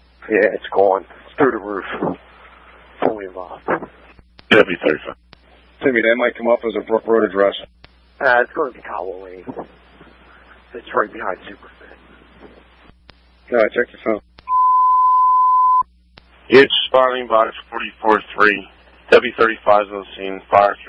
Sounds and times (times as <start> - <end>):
Speech: 0.2 - 2.2, 3.0 - 5.2, 5.8 - 9.7, 10.7 - 12.2, 13.5 - 14.3, 16.5 - 20.8.